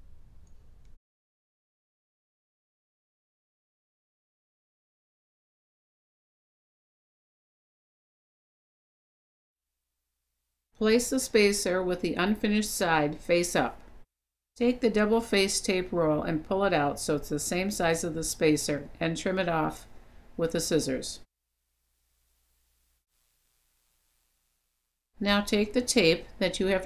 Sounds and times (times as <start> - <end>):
Speech: 10.8 - 13.8, 14.6 - 21.3, 25.2 - 26.8.